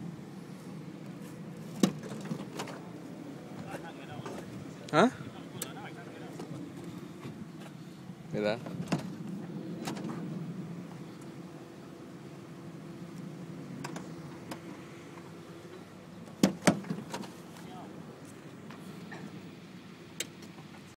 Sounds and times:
Speech: 3.6 - 6.4, 8.3 - 8.7, 17.6 - 18.0.

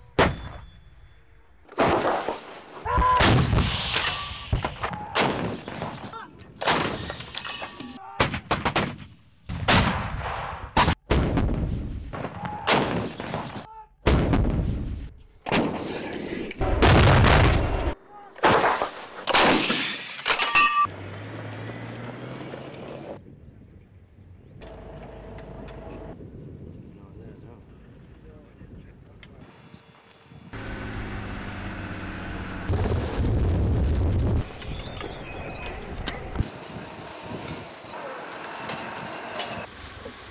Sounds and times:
Artillery fire: 8.2 - 20.0.

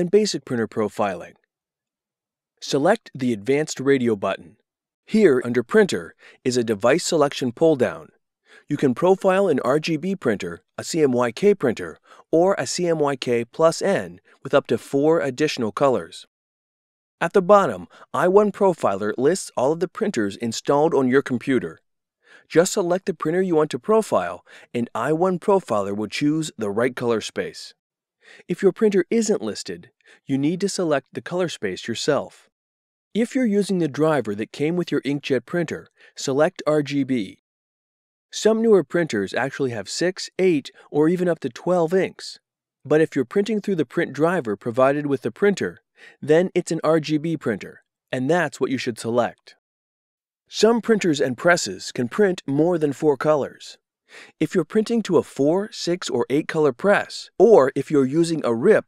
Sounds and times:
Speech: 0.0 - 1.4, 2.6 - 16.3, 17.2 - 21.8, 22.4 - 27.8, 28.4 - 32.5, 33.2 - 37.4, 38.3 - 49.6, 50.5 - 58.8.

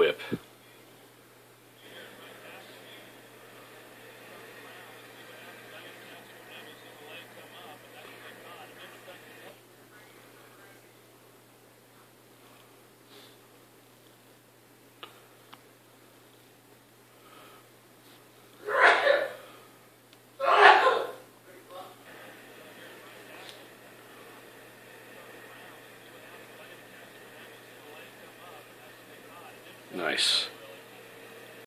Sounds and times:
Speech: 0.0 - 0.8, 4.0 - 11.0, 21.5 - 31.1.

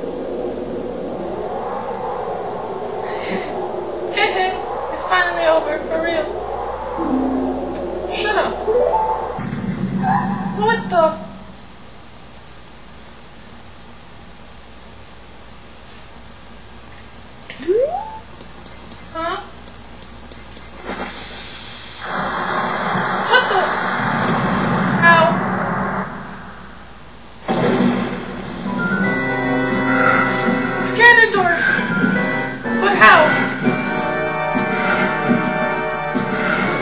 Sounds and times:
Speech: 4.2 - 6.3, 10.6 - 11.3, 19.2 - 19.5, 23.3 - 23.7, 25.0 - 25.4, 30.9 - 31.7, 32.8 - 33.4.

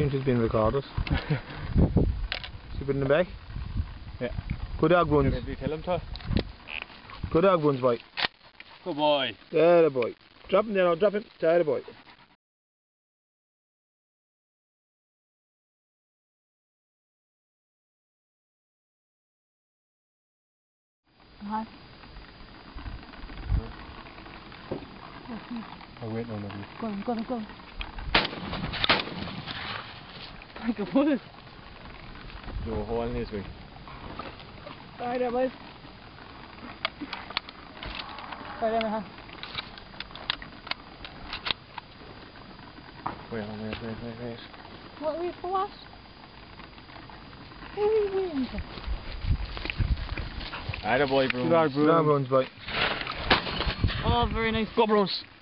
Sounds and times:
Cap gun: 28.1 - 29.4.

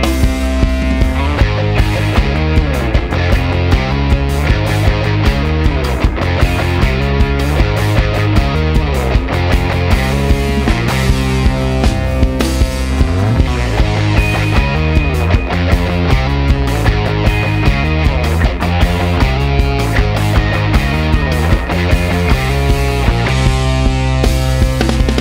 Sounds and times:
Music: 0.0 - 25.2.

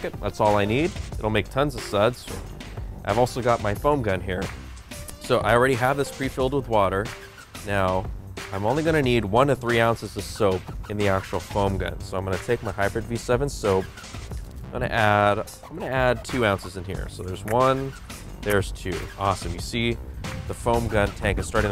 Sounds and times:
Speech: 0.0 - 2.3, 3.1 - 4.5, 5.2 - 13.9, 14.7 - 21.7
Music: 0.0 - 21.7.

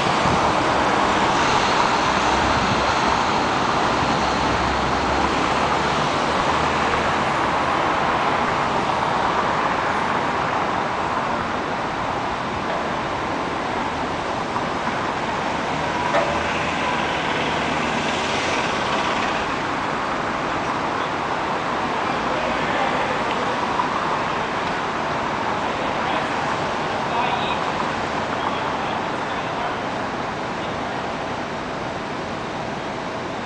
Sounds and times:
Vehicle: 0.0 - 33.4
Speech: 22.2 - 23.6, 25.8 - 29.9.

